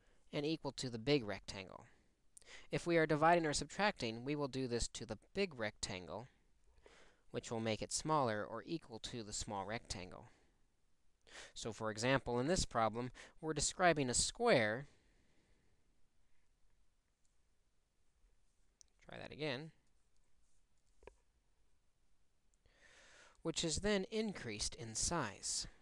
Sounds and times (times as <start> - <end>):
Speech: 0.3 - 2.0, 2.7 - 6.4, 7.3 - 10.4, 11.6 - 14.9, 19.0 - 19.8, 23.4 - 25.8.